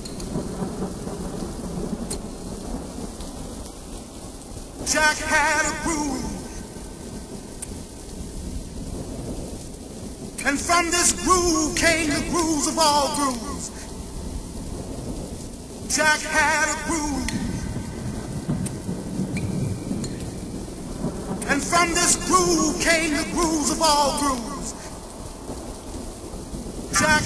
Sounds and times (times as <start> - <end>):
Speech: 4.9 - 6.5, 10.4 - 13.8, 15.9 - 17.5, 21.4 - 24.9, 27.0 - 27.2.